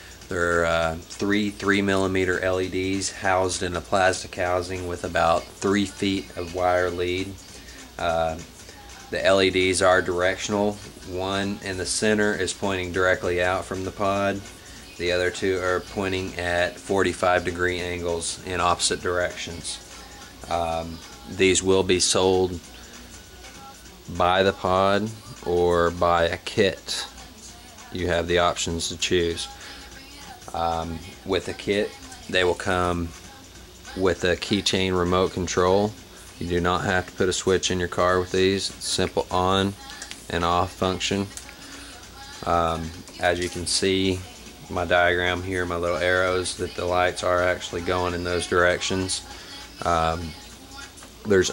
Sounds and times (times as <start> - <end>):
Music: 0.0 - 51.5
Speech: 0.3 - 7.4, 8.0 - 8.5, 9.1 - 19.8, 20.5 - 22.6, 24.1 - 27.2, 27.9 - 29.5, 30.5 - 33.2, 33.9 - 41.4, 42.4 - 49.2, 49.8 - 50.4, 51.2 - 51.5.